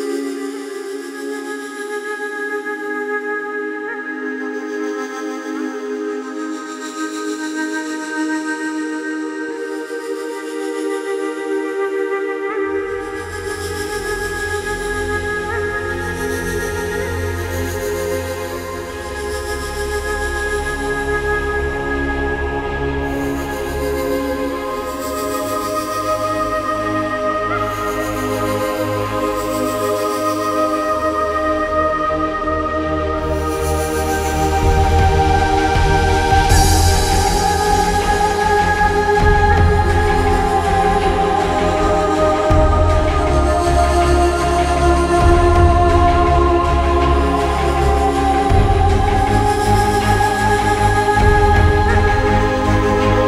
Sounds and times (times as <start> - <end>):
New-age music: 0.0 - 53.2.